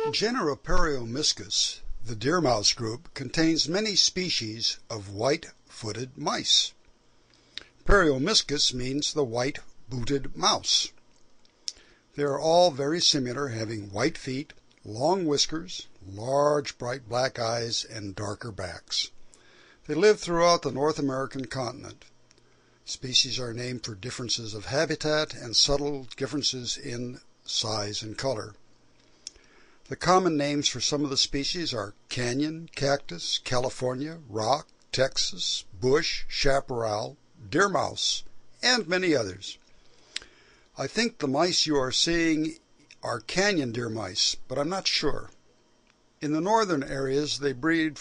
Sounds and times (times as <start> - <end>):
Speech: 0.0 - 6.8, 7.8 - 11.0, 12.2 - 19.2, 19.9 - 22.1, 22.9 - 28.6, 29.9 - 39.6, 40.8 - 45.4, 46.2 - 48.0.